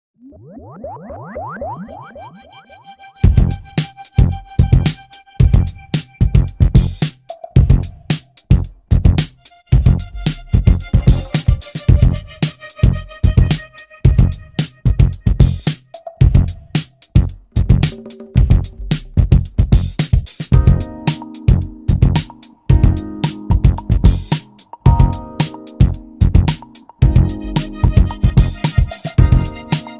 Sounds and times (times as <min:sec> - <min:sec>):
Soul music: 0:09.4 - 0:15.1, 0:20.6 - 0:29.9.